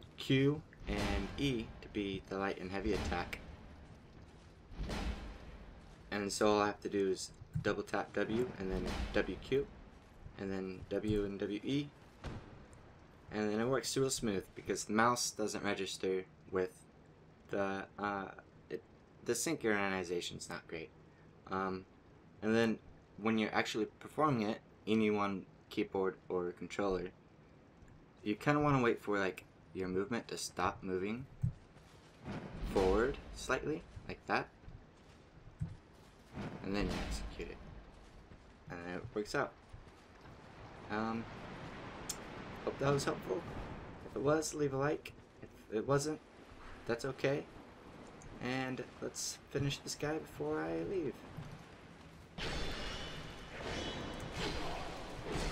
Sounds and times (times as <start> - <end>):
Speech: 0.2 - 3.4, 6.1 - 9.7, 10.4 - 11.9, 13.3 - 16.8, 17.5 - 20.9, 21.5 - 27.1, 28.3 - 31.3, 32.7 - 34.5, 36.6 - 37.6, 38.7 - 39.6, 40.9 - 41.3, 42.6 - 43.5, 44.1 - 46.2, 46.8 - 47.5, 48.4 - 51.2.